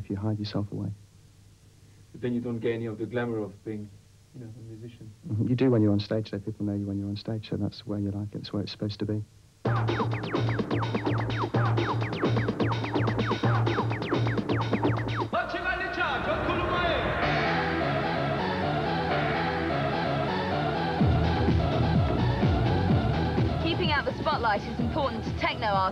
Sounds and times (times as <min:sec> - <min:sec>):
Soundtrack music: 0:09.6 - 0:25.9.